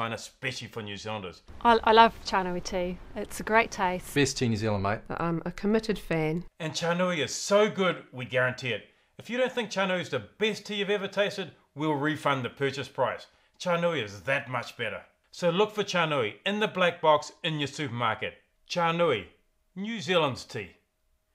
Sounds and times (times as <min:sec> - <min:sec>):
Speech: 0:00.0 - 0:20.8.